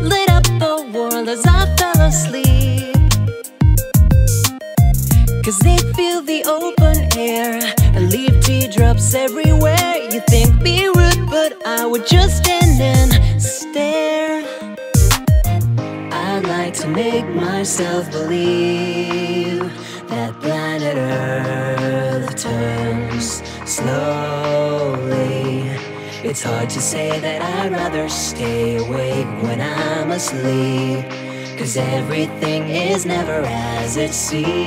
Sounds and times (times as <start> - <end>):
Music: 0.0 - 34.6.